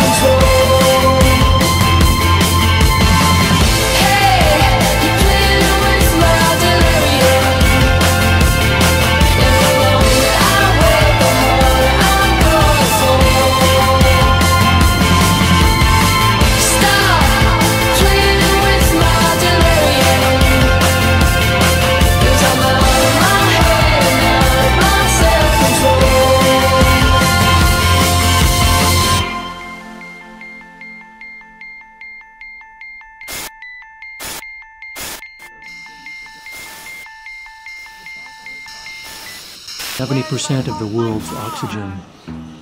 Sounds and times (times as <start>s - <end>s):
Music: 0.0s - 42.6s
Speech: 40.0s - 42.1s.